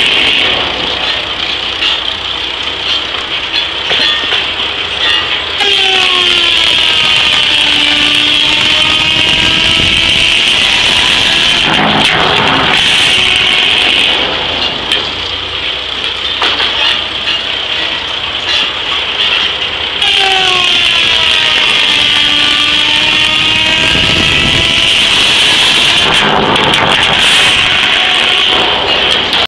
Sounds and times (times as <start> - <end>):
Sawing: 0.0 - 29.4.